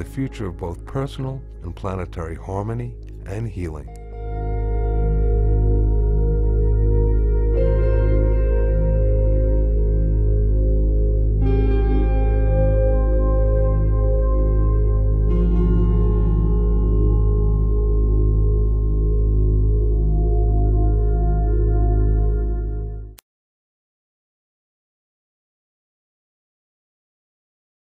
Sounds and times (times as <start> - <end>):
New-age music: 0.0 - 23.2.